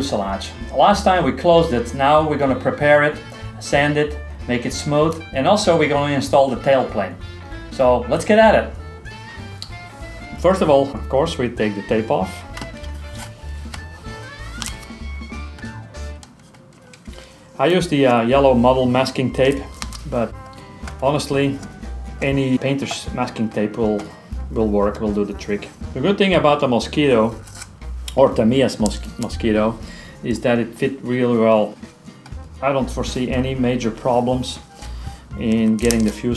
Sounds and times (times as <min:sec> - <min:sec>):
Speech: 0:00.0 - 0:08.8, 0:10.4 - 0:12.3, 0:17.6 - 0:20.3, 0:21.0 - 0:27.4, 0:28.1 - 0:31.8, 0:32.6 - 0:34.6, 0:35.4 - 0:36.3
Music: 0:00.0 - 0:36.3.